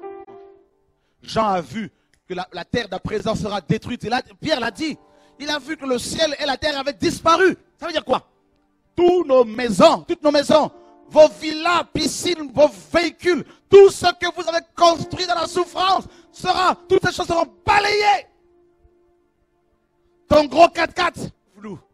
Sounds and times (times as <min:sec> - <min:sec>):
Music: 0:00.0 - 0:21.9
Speech: 0:01.3 - 0:08.3, 0:09.0 - 0:18.3, 0:20.3 - 0:21.8.